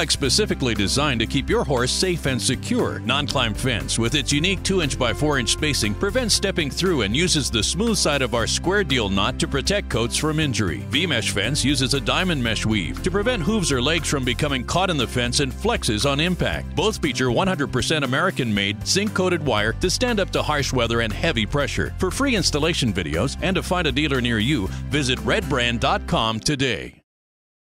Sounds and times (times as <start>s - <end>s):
Music: 0.0s - 27.1s
Speech: 0.0s - 27.1s.